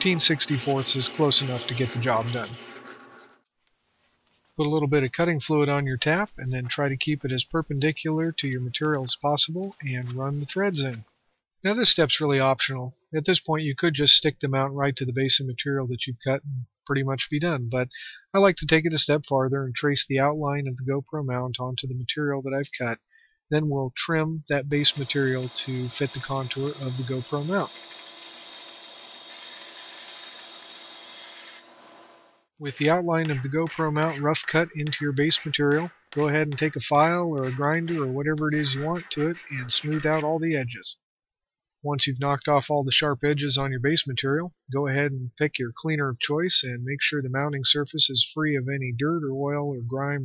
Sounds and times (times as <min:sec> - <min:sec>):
Speech: 0:00.0 - 0:02.6, 0:04.6 - 0:11.0, 0:11.6 - 0:27.7, 0:32.6 - 0:41.0, 0:41.9 - 0:50.2
Inside, small room: 0:00.0 - 0:41.0.